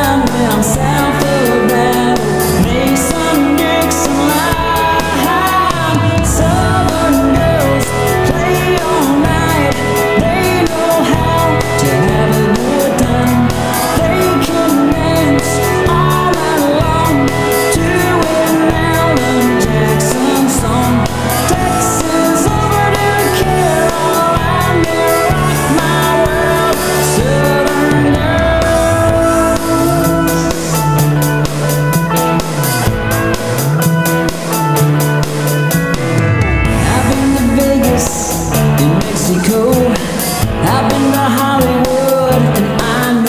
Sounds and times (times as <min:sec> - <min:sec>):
Singing: 0:00.0 - 0:31.1, 0:36.7 - 0:43.2
Independent music: 0:00.0 - 0:43.2
Pop music: 0:00.0 - 0:43.2
Song: 0:00.0 - 0:43.2.